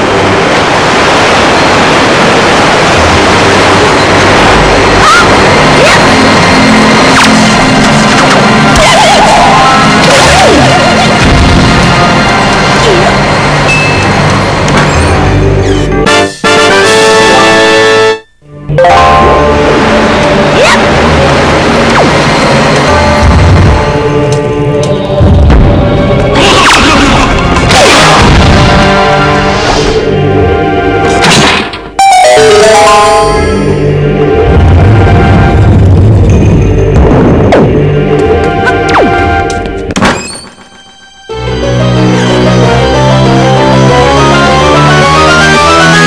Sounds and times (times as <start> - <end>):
Music: 5.0 - 46.0.